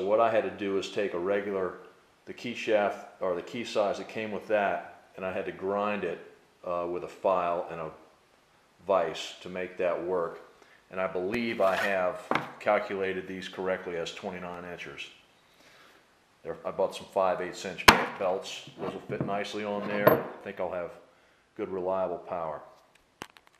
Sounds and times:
Speech: 0:00.0 - 0:08.0, 0:08.8 - 0:15.2, 0:16.4 - 0:21.0, 0:21.6 - 0:22.7.

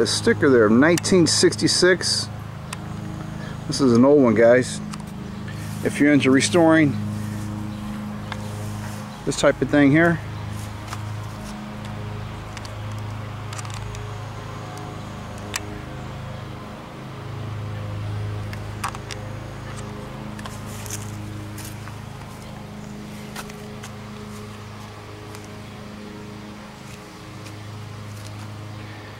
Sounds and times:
Speech: 0:00.0 - 0:02.3, 0:03.7 - 0:04.8, 0:05.8 - 0:07.0, 0:09.2 - 0:10.2.

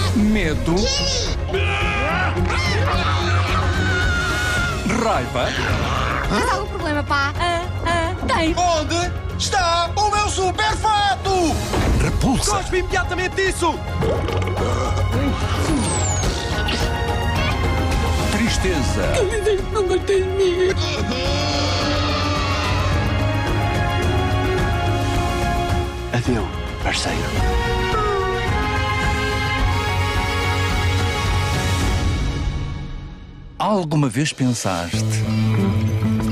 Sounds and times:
Music: 0:00.0 - 0:36.3.

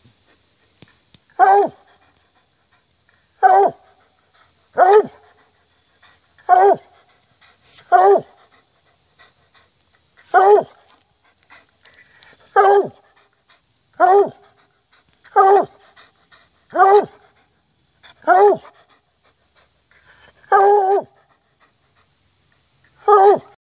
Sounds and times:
Yip: 0:23.0 - 0:23.5.

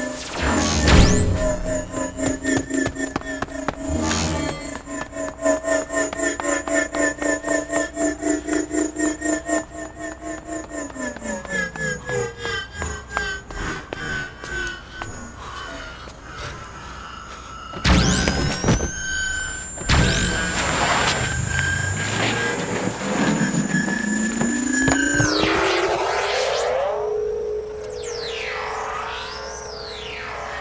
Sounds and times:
Outside, urban or manmade: 0:00.0 - 0:30.6.

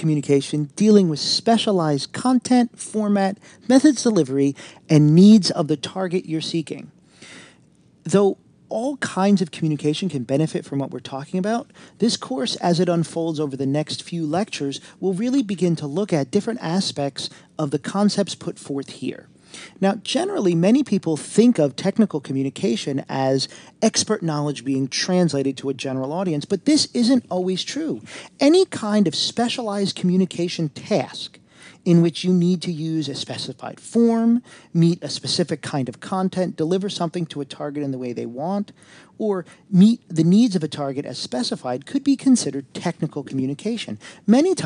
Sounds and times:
Speech: 0:00.0 - 0:07.0, 0:08.0 - 0:44.6.

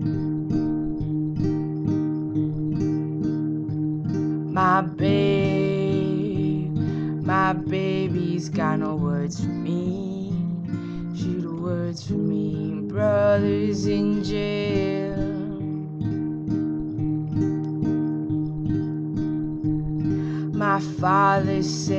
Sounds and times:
Music: 0:00.0 - 0:21.9.

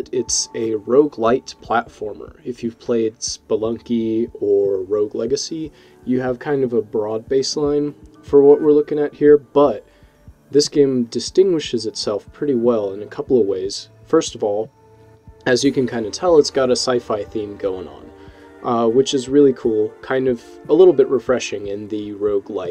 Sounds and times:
Speech: 0:00.0 - 0:09.8, 0:10.5 - 0:14.7, 0:15.4 - 0:22.7
Music: 0:00.0 - 0:22.7.

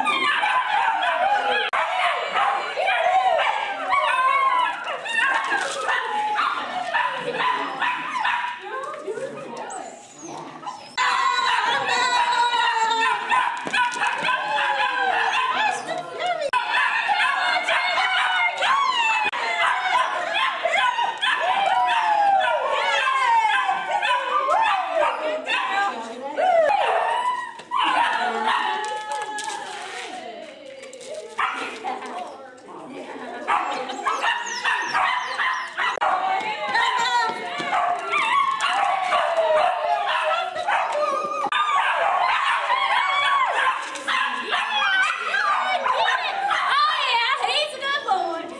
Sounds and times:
Speech: 0:01.0 - 0:13.4, 0:14.3 - 0:41.4, 0:42.7 - 0:48.5.

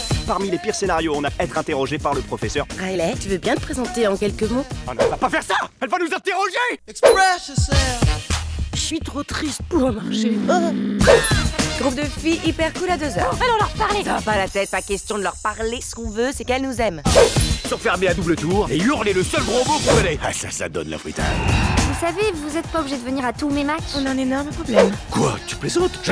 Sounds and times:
Music: 0:00.0 - 0:05.7, 0:07.2 - 0:10.1, 0:11.0 - 0:26.1
Speech: 0:00.3 - 0:08.0, 0:08.8 - 0:10.9, 0:11.8 - 0:17.1, 0:17.7 - 0:26.1.

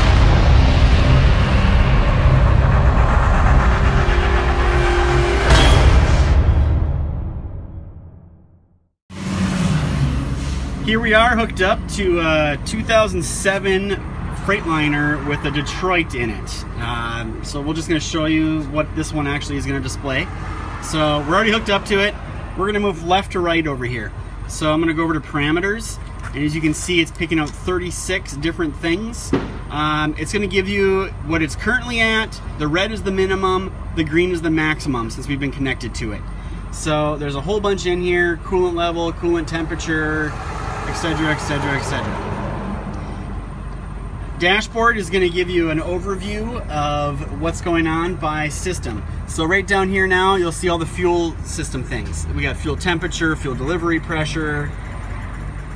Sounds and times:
Vehicle: 0:00.0 - 0:07.2, 0:09.1 - 0:55.7
Speech: 0:10.8 - 0:42.2, 0:44.4 - 0:54.8.

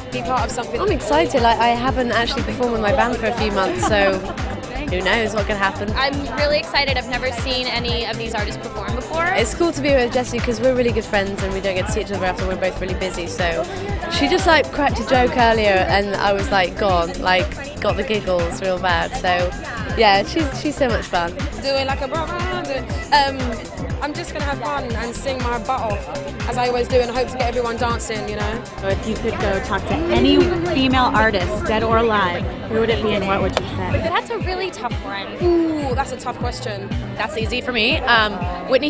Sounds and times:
Dance music: 0:00.0 - 0:38.8
Exciting music: 0:00.0 - 0:38.8
Speech: 0:00.0 - 0:38.8.

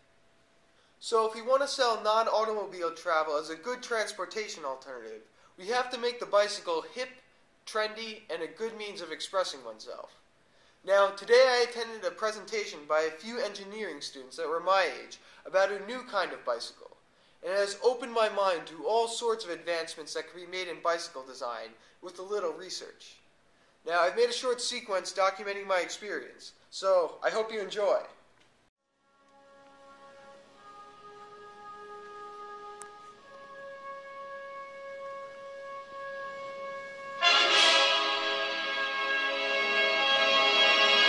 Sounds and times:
Speech: 0:01.0 - 0:10.2, 0:10.9 - 0:23.2, 0:23.9 - 0:28.2.

